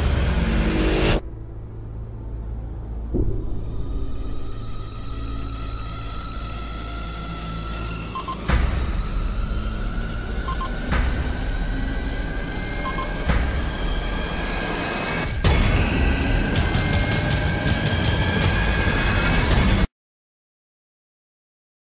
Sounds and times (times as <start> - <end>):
Music: 0.0 - 19.9
Sound effect: 0.0 - 19.9.